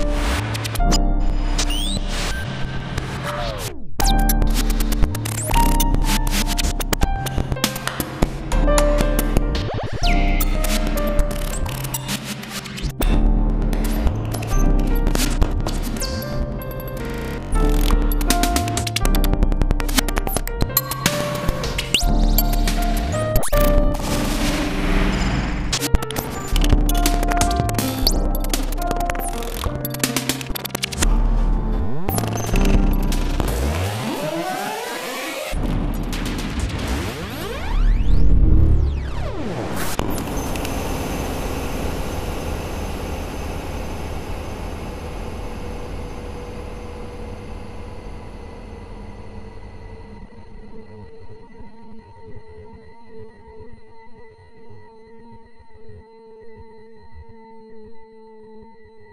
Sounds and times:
Music: 0:00.0 - 0:59.1.

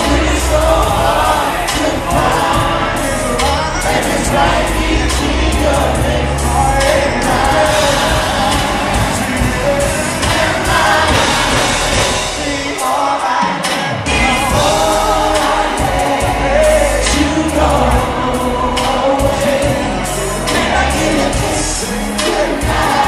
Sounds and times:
Folk music: 0:00.0 - 0:23.0.

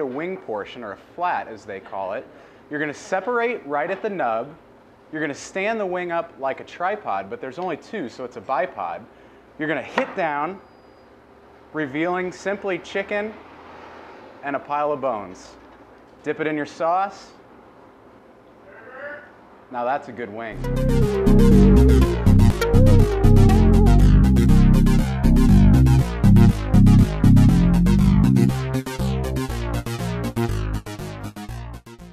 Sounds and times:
Speech: 0:00.0 - 0:10.6, 0:11.8 - 0:13.4, 0:14.4 - 0:15.6, 0:16.2 - 0:17.4, 0:19.0 - 0:20.6
Music: 0:20.6 - 0:32.1.

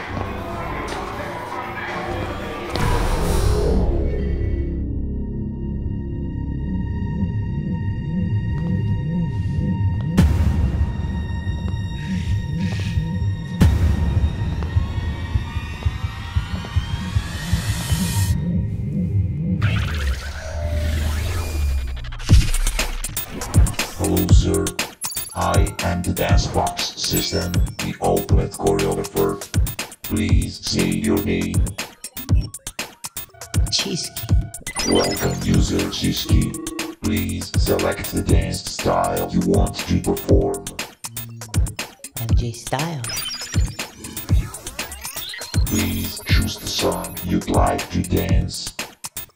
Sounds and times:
Music: 0:00.0 - 0:49.3.

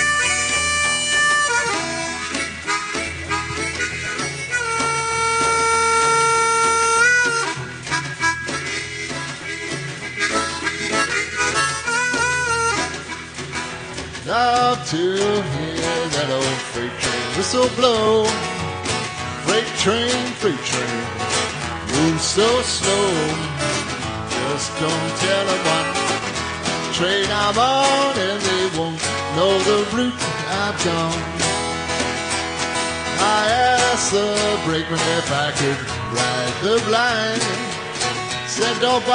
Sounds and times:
Music: 0:00.0 - 0:39.1.

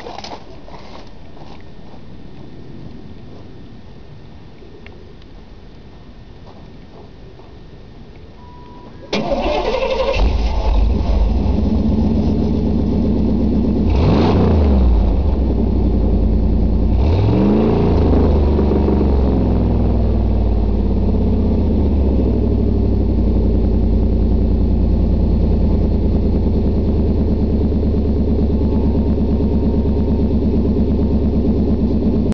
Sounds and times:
Vehicle: 0:00.0 - 0:32.3.

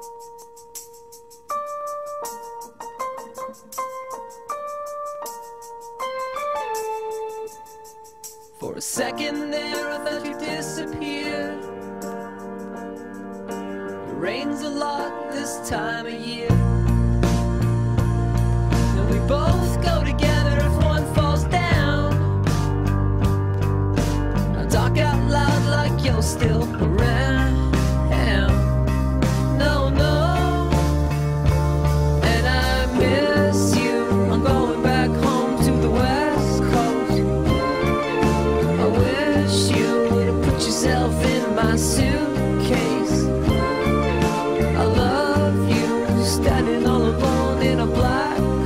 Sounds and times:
Music: 0:00.0 - 0:48.6.

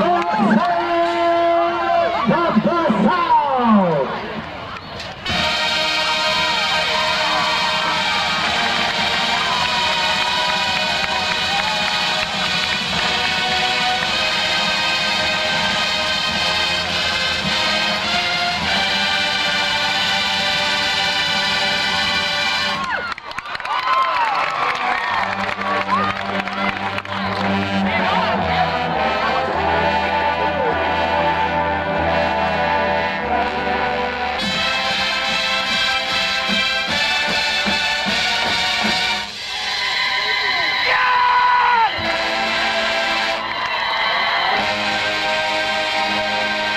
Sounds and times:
Music: 0:00.0 - 0:03.7, 0:04.9 - 0:46.7.

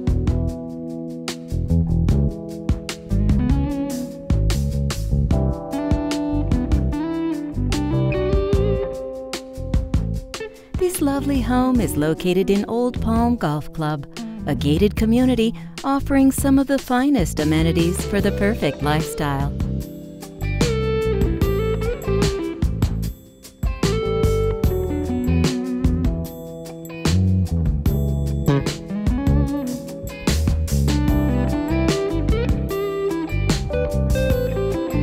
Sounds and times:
Bass guitar: 0:00.0 - 0:16.6, 0:17.2 - 0:35.0.

